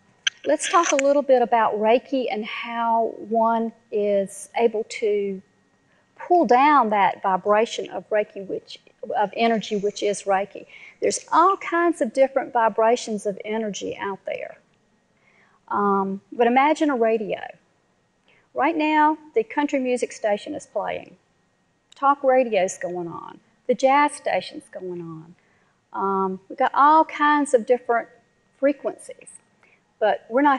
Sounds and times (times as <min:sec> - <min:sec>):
Speech: 0:00.3 - 0:05.5, 0:06.2 - 0:14.6, 0:15.7 - 0:17.6, 0:18.6 - 0:21.2, 0:22.0 - 0:25.4, 0:26.0 - 0:29.4, 0:30.0 - 0:30.5.